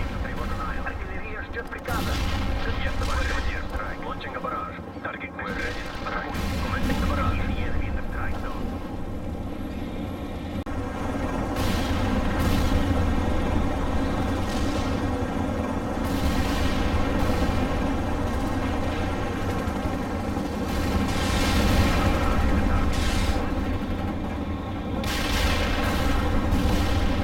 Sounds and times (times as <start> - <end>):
Artillery fire: 1.9 - 4.0, 5.5 - 7.8, 11.6 - 13.2, 14.3 - 15.0, 16.0 - 17.7, 20.6 - 23.5, 25.0 - 27.2.